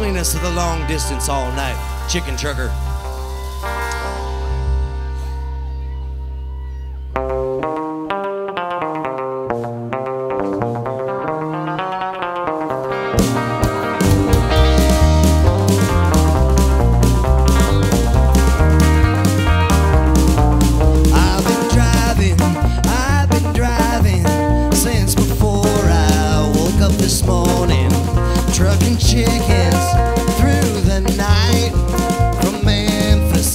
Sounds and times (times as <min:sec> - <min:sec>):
Music: 0:00.0 - 0:33.5.